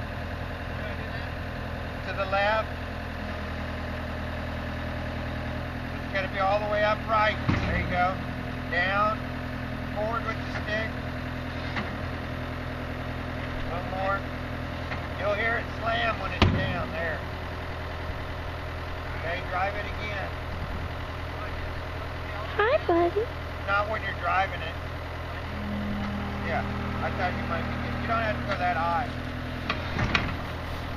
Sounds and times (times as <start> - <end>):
Speech: 10.0 - 10.9, 15.2 - 17.2, 21.4 - 24.8, 26.5 - 29.2.